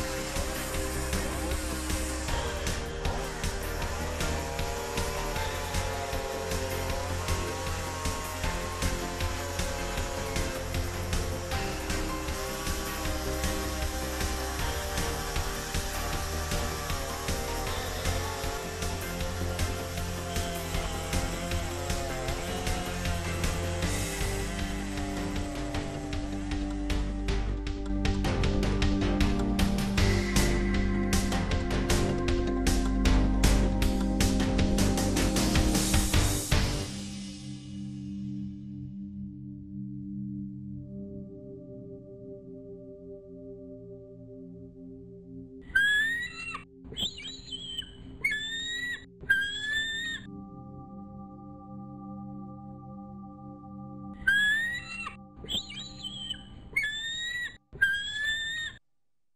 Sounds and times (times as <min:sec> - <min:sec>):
Music: 0:00.0 - 0:57.5
Chirp, tweet: 0:45.7 - 0:50.3, 0:54.2 - 0:58.8.